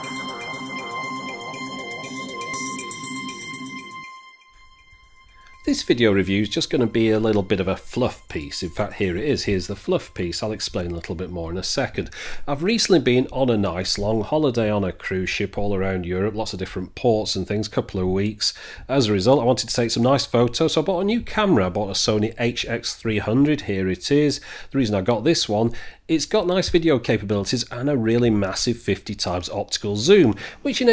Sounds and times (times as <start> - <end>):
Speech: 5.6 - 30.9.